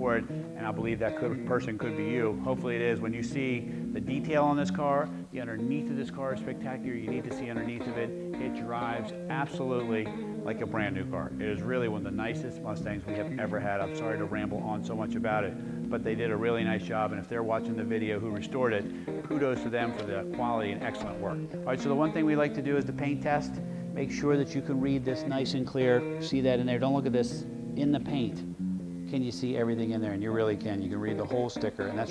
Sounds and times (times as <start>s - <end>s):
Speech: 0.0s - 28.4s, 29.1s - 32.1s
Music: 0.0s - 32.1s.